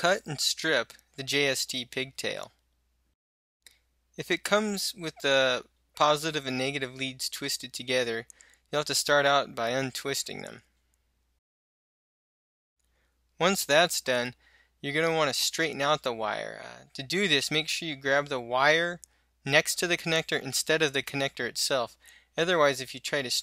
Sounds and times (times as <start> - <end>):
Speech: 0.0 - 2.6, 4.2 - 10.7, 13.4 - 23.4.